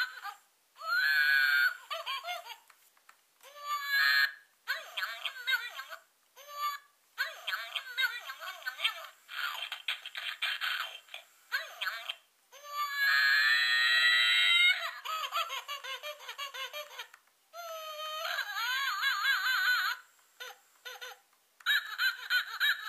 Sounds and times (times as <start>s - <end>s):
Inside, small room: 0.0s - 22.8s.